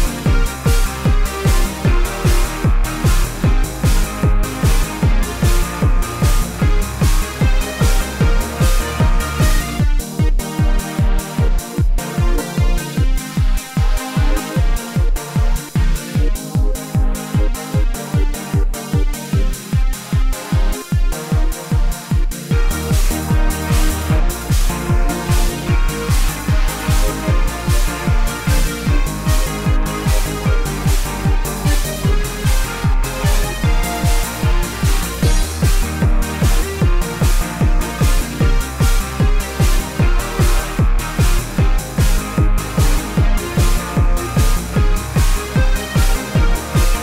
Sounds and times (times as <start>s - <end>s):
Music: 0.0s - 47.0s.